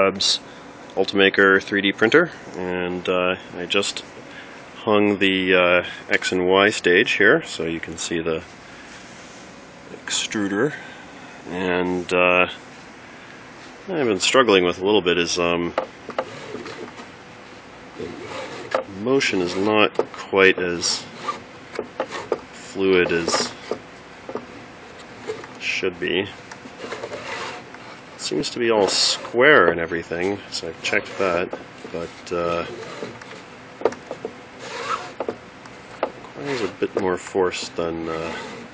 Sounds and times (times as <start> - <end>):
Speech: 0.0 - 0.4, 1.0 - 4.1, 4.8 - 8.5, 9.9 - 10.9, 11.5 - 12.6, 13.8 - 15.8, 18.8 - 21.1, 22.7 - 23.6, 25.6 - 26.4, 28.2 - 32.8, 36.4 - 38.5.